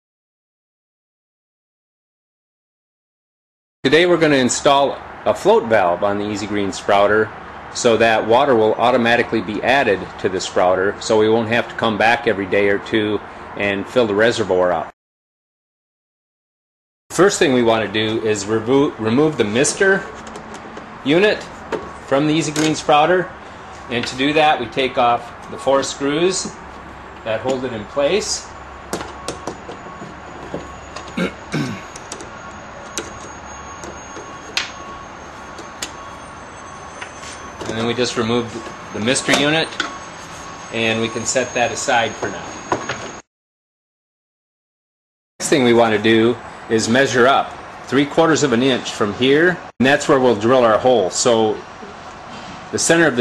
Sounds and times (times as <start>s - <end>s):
Speech: 3.9s - 14.9s, 17.1s - 20.1s, 21.0s - 21.5s, 22.1s - 26.6s, 27.2s - 28.5s, 37.7s - 39.8s, 40.7s - 42.5s, 45.4s - 51.7s, 52.7s - 53.2s.